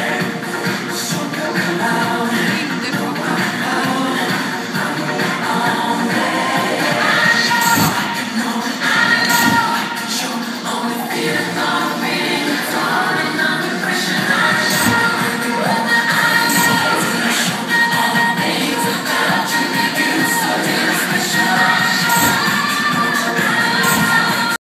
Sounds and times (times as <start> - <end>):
Music: 0.0 - 24.6.